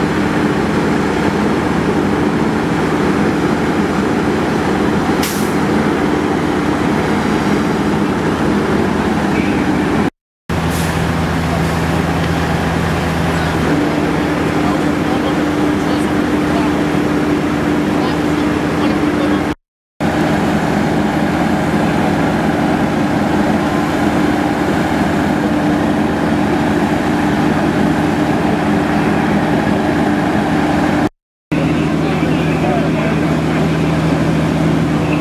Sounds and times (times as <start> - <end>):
Speech: 13.2 - 17.0, 17.9 - 19.6, 31.6 - 34.2.